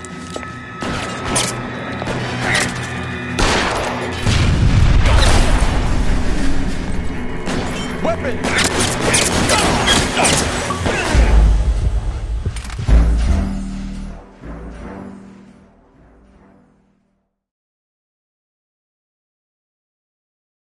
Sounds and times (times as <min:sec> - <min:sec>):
Music: 0:00.0 - 0:17.5.